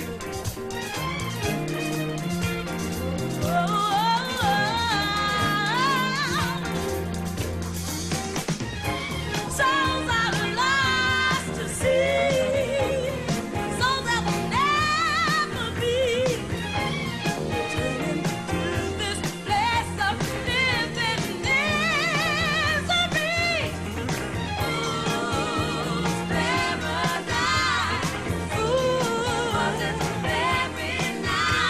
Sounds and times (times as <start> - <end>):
Pop music: 0.0 - 31.7.